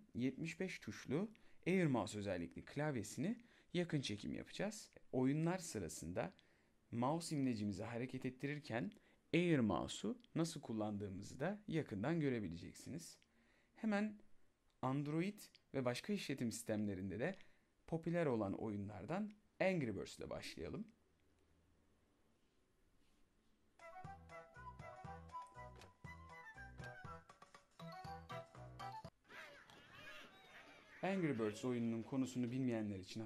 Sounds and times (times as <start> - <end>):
Speech: 0.0 - 13.2, 13.8 - 14.2, 14.8 - 21.0, 29.4 - 33.2
Music: 23.8 - 29.2.